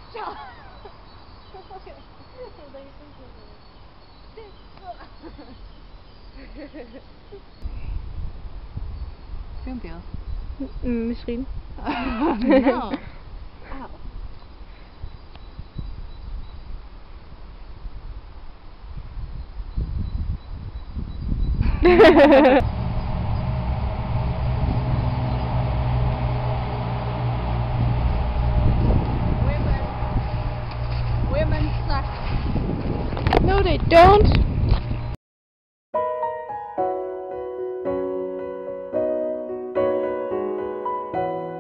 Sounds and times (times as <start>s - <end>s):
Outside, rural or natural: 0.0s - 35.2s.